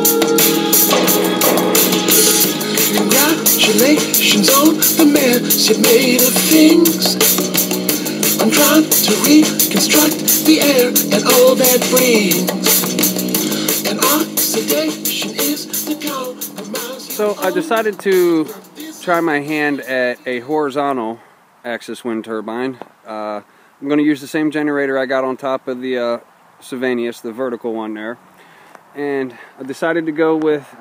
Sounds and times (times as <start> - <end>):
Music: 0.0 - 20.5
Speech: 17.2 - 18.5, 19.1 - 28.2, 29.0 - 30.8.